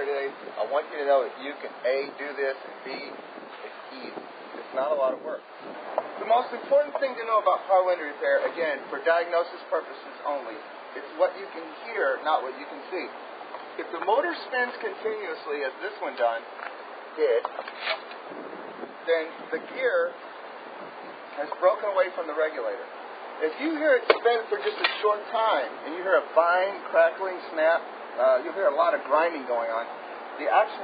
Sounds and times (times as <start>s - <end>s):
Speech: 0.0s - 5.4s, 6.2s - 13.2s, 13.8s - 16.5s, 17.2s - 18.0s, 19.0s - 20.2s, 21.3s - 30.8s.